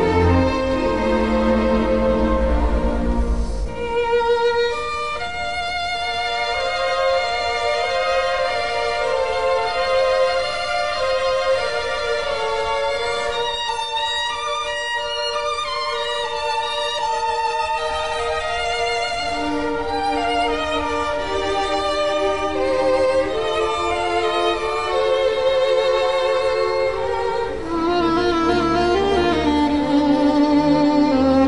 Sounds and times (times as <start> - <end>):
Violin, fiddle: 0.0 - 31.4.